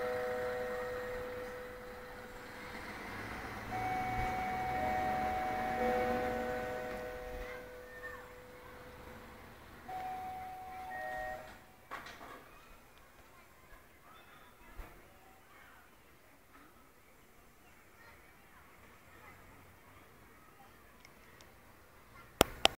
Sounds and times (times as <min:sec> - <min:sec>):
Speech: 0:07.4 - 0:09.2, 0:12.2 - 0:22.6.